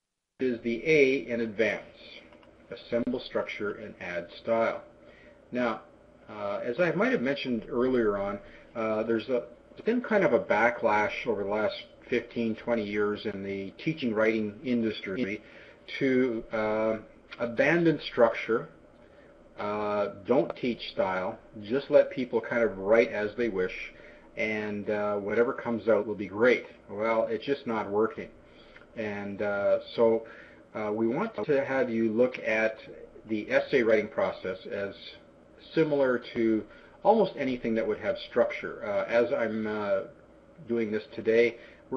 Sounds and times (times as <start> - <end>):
Speech: 0.4 - 4.9, 5.5 - 18.8, 19.6 - 28.4, 29.0 - 41.9.